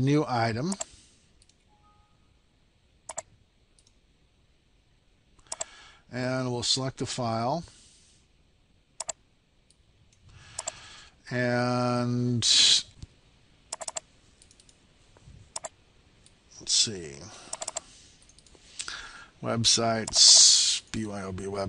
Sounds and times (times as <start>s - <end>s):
Speech: 0.0s - 0.8s, 6.1s - 7.7s, 11.3s - 13.0s, 16.5s - 17.4s, 19.4s - 21.6s.